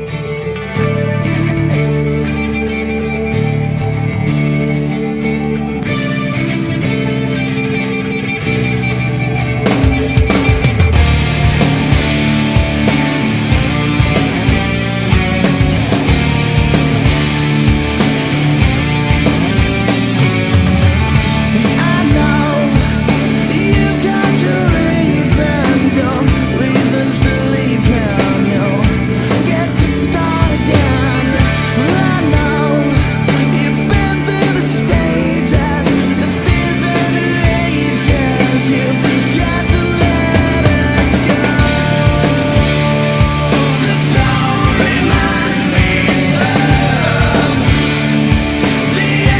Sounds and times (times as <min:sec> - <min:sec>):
Progressive rock: 0:00.0 - 0:49.3.